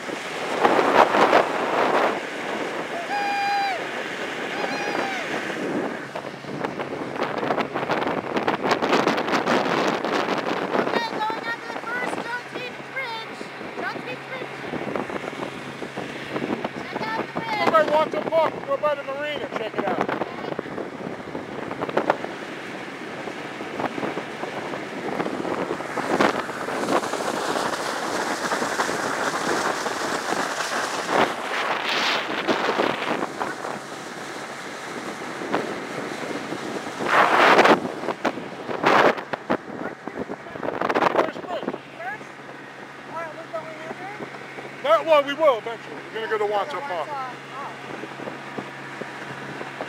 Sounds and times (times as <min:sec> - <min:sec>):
Motorboat, speedboat: 0:00.0 - 0:49.8
Wind noise (microphone): 0:00.0 - 0:49.8.